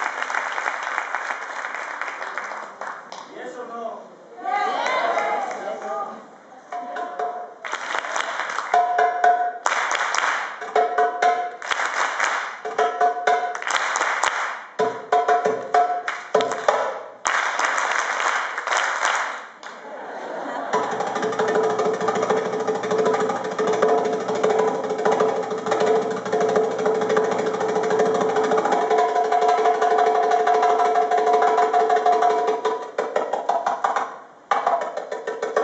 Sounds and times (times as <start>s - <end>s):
Speech: 3.3s - 6.8s
Wood block: 8.7s - 9.7s, 10.4s - 11.8s, 12.5s - 14.0s, 14.8s - 17.1s, 20.7s - 35.6s.